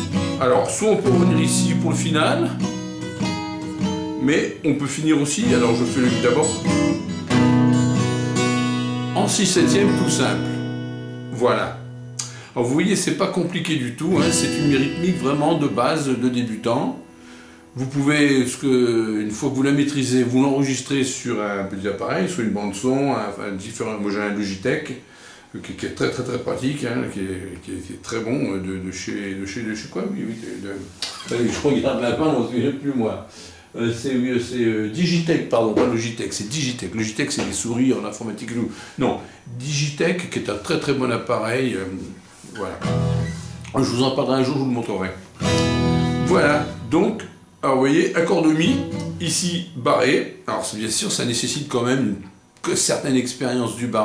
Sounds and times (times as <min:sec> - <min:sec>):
Speech: 0:00.0 - 0:02.6, 0:04.2 - 0:06.7, 0:09.2 - 0:10.6, 0:11.3 - 0:11.8, 0:12.6 - 0:17.0, 0:17.8 - 0:42.9, 0:43.7 - 0:45.3, 0:46.3 - 0:54.0
Blues: 0:00.0 - 0:12.4, 0:13.9 - 0:17.9, 0:42.6 - 0:44.0, 0:45.2 - 0:47.3, 0:48.5 - 0:49.4
Acoustic guitar: 0:00.0 - 0:20.1, 0:30.3 - 0:32.2, 0:42.0 - 0:49.8.